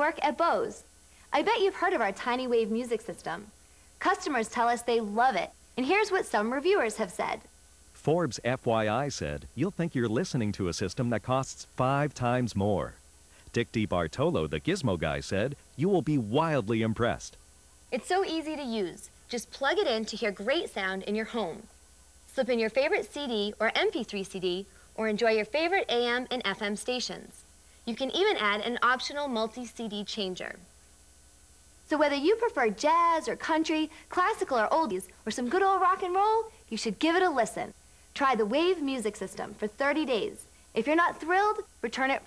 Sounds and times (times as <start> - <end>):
Speech: 0.0 - 7.4, 8.0 - 21.7, 22.3 - 30.6, 31.9 - 42.2.